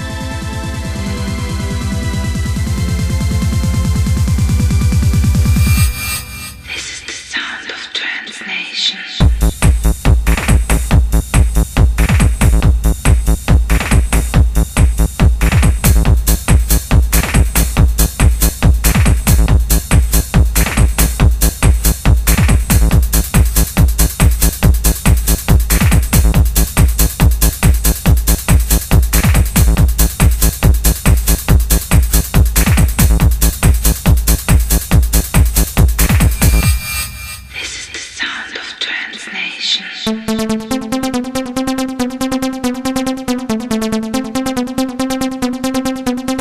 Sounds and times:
Music: 0.0s - 7.4s, 9.2s - 38.0s, 40.1s - 46.4s.

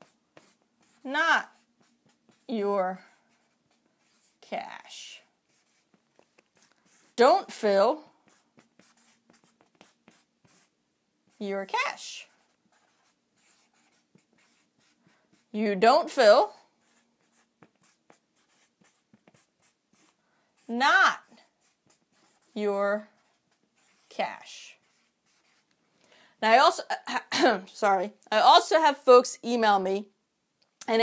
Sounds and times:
Speech: 1.0s - 1.6s, 2.5s - 3.1s, 4.4s - 5.3s, 7.2s - 8.1s, 11.4s - 12.3s, 15.6s - 16.6s, 20.7s - 21.3s, 22.5s - 23.1s, 24.1s - 24.9s, 26.4s - 30.1s.

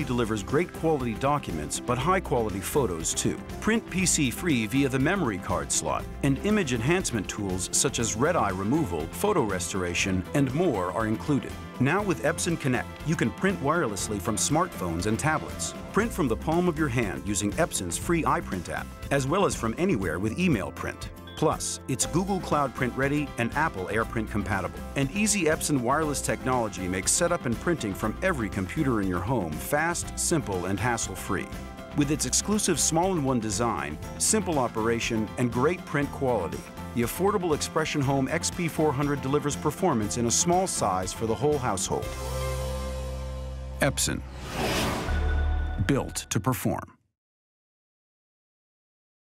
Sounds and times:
Speech: 0.0s - 42.1s, 43.8s - 44.3s, 45.8s - 47.0s
Music: 0.0s - 47.0s.

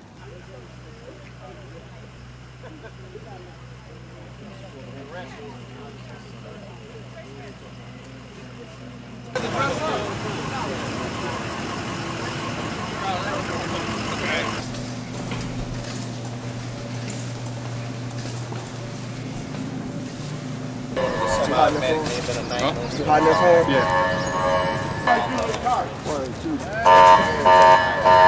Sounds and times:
Speech: 0.2s - 14.6s.

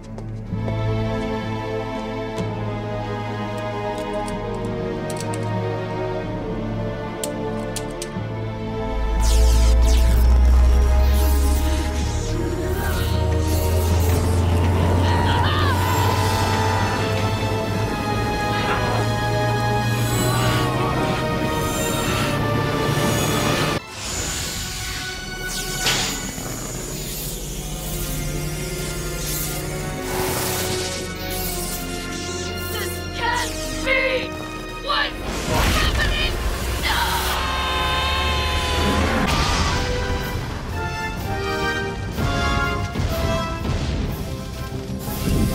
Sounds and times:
Music: 0.0s - 45.5s
Speech: 34.9s - 37.3s.

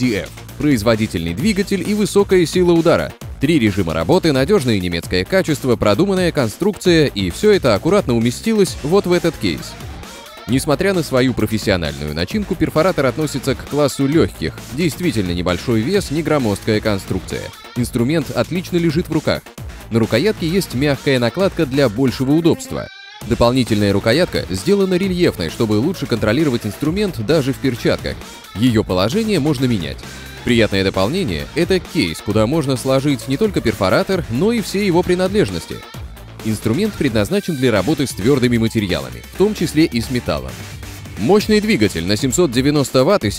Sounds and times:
Speech: 0.0s - 9.8s, 10.5s - 40.6s, 41.2s - 43.3s
Music: 0.0s - 43.3s.

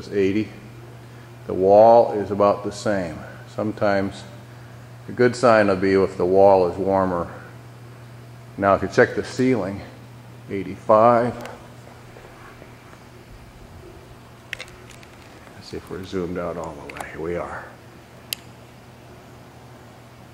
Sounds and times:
Speech: 0.0s - 0.6s, 1.5s - 4.4s, 5.1s - 7.5s, 8.6s - 11.6s, 15.6s - 17.8s.

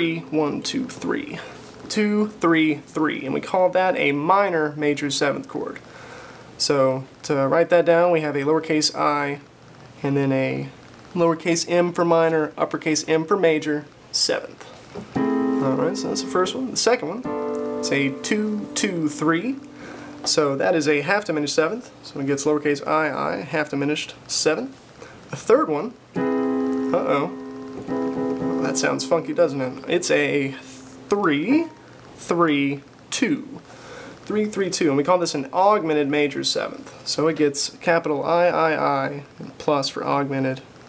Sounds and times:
Piano: 15.2s - 21.5s, 26.2s - 31.9s.

